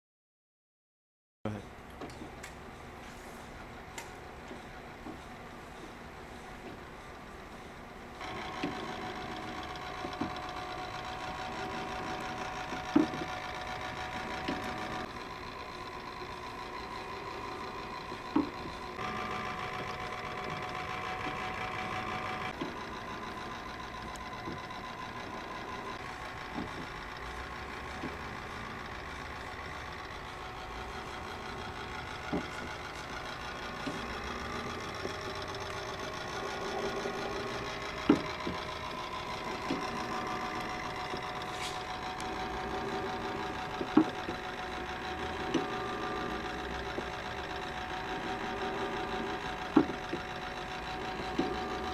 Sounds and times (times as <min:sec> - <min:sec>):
Engine: 0:01.5 - 0:51.9.